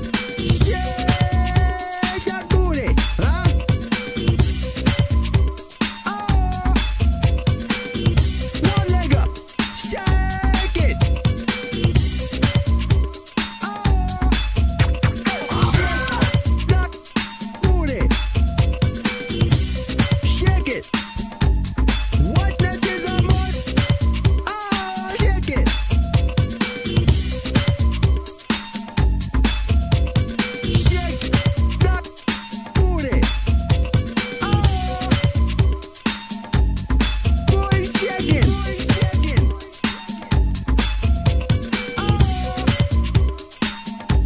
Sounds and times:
Music: 0.0s - 44.2s.

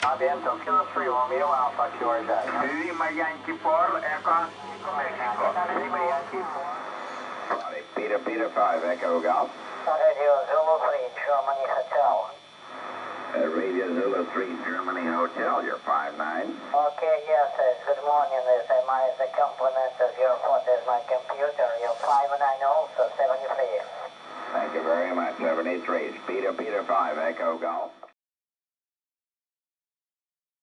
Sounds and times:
Speech: 0.0s - 6.8s, 7.5s - 12.4s, 13.3s - 28.2s
Radio: 0.0s - 28.2s.

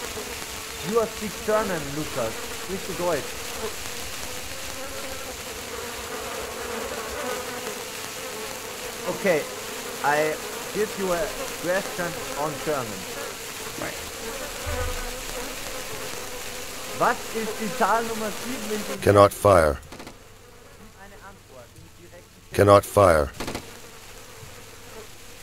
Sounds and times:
Outside, rural or natural: 0.0s - 11.8s, 13.0s - 25.4s
Speech: 0.8s - 3.3s, 9.1s - 13.1s, 13.8s - 14.0s, 17.0s - 19.8s, 20.8s - 23.4s.

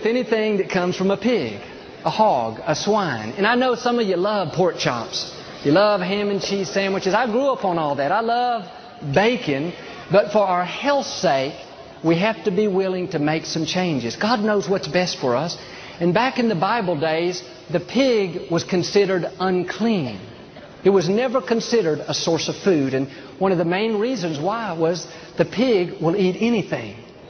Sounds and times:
Speech: 0.0s - 27.1s.

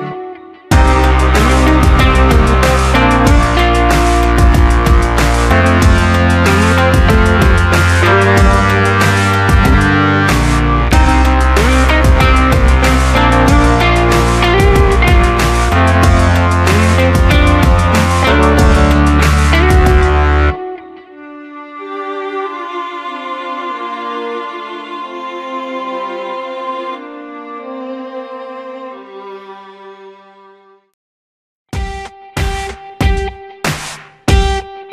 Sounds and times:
Bowed string instrument: 0.0s - 31.0s.

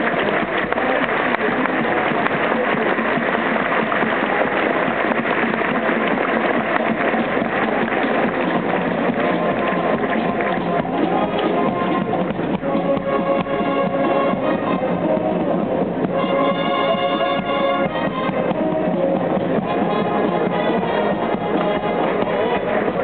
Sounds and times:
Music: 0.0s - 23.0s.

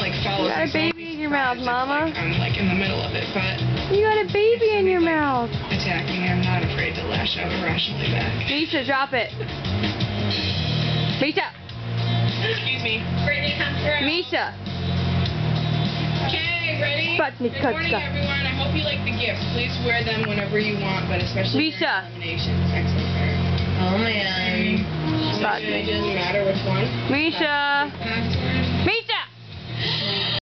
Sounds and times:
Music: 0.0s - 30.4s.

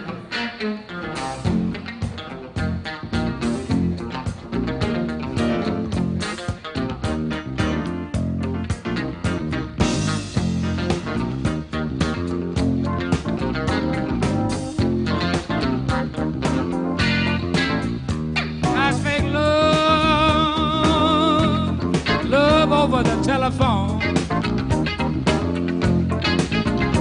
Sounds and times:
Bass guitar: 0.0s - 27.0s.

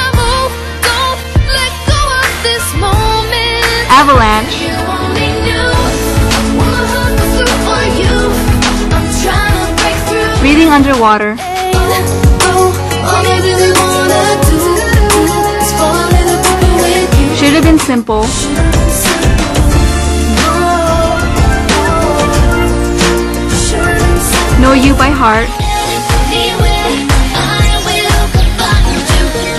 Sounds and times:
Music: 0.0s - 29.5s
Speech: 3.9s - 4.6s, 10.4s - 11.4s, 17.3s - 18.3s, 24.6s - 25.5s.

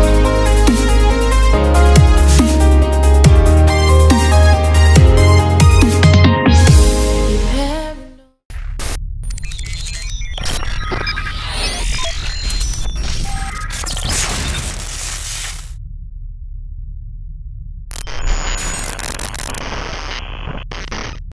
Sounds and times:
Sound effect: 8.5s - 21.3s.

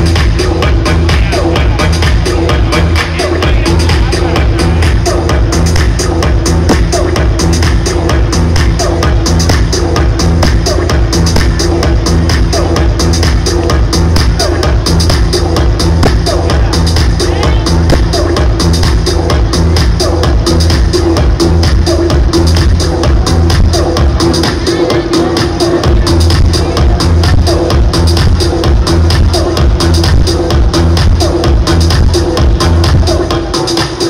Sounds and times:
Music: 0.0s - 34.1s
Speech: 16.3s - 17.9s, 24.5s - 27.2s.

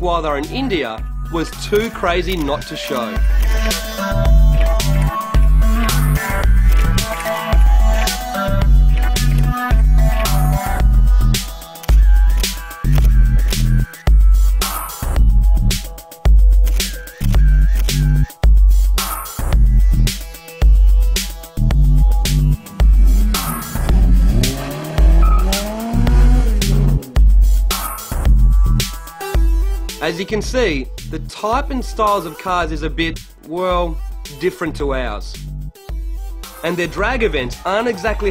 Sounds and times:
Speech: 0.0s - 3.2s, 30.0s - 35.4s, 36.6s - 38.3s
Music: 0.0s - 38.3s
Car: 23.0s - 27.2s.

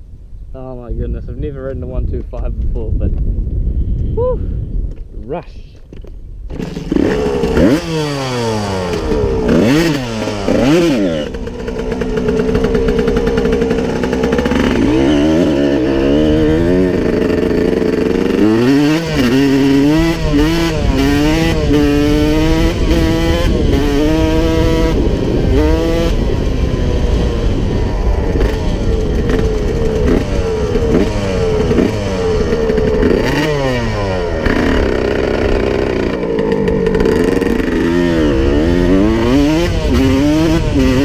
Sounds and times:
Motorcycle: 5.8s - 41.0s.

